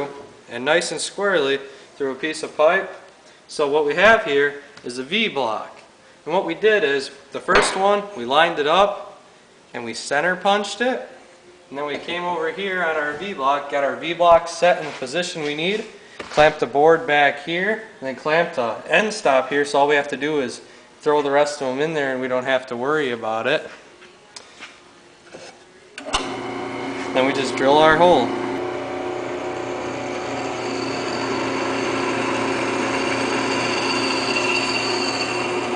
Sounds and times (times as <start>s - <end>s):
Speech: 0.0s - 23.7s, 27.2s - 28.4s.